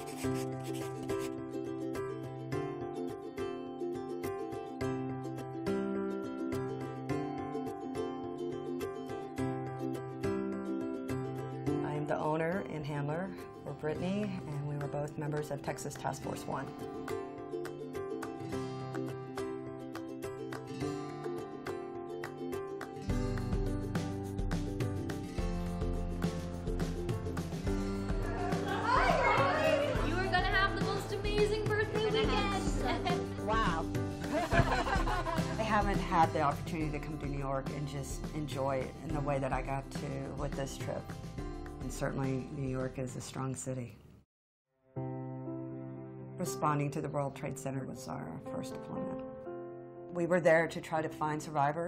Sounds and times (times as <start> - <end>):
Music: 0.0 - 44.0, 44.7 - 51.8.